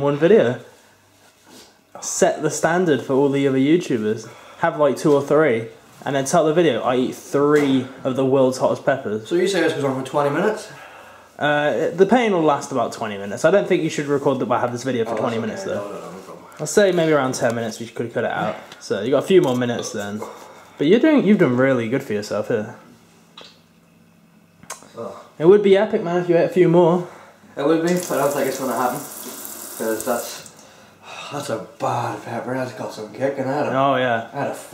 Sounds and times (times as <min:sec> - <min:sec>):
Sizzle: 0:27.9 - 0:30.5.